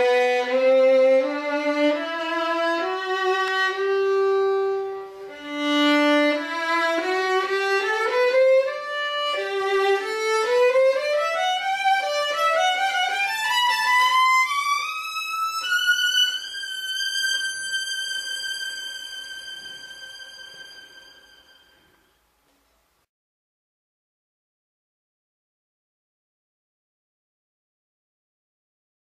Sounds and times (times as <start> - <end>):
Violin, fiddle: 0.0 - 22.1.